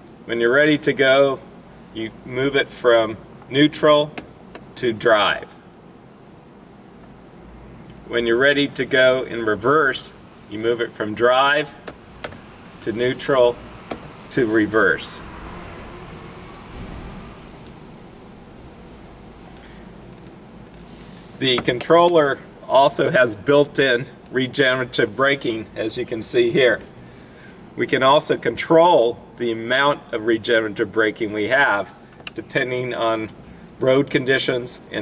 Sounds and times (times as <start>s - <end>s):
Speech: 0.3s - 4.2s, 4.8s - 5.6s, 8.1s - 11.8s, 12.8s - 13.6s, 14.3s - 15.2s, 21.4s - 26.9s, 27.8s - 35.0s.